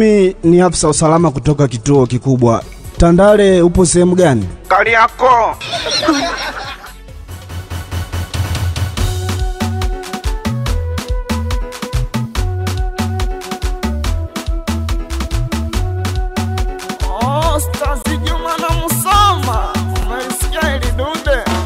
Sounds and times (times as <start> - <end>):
Afrobeat: 4.6 - 21.6.